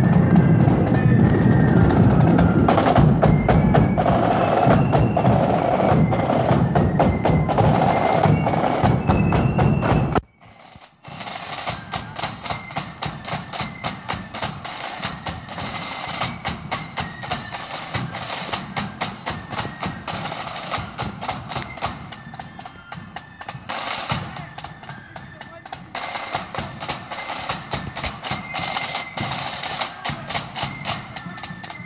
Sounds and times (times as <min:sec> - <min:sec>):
Flute: 0:00.0 - 0:31.8.